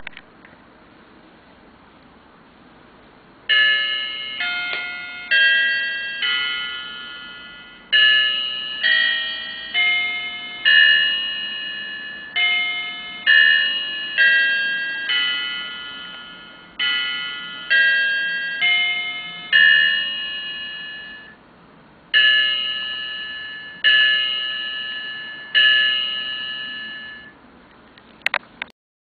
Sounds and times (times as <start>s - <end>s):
Clock: 3.5s - 21.4s, 22.2s - 27.4s.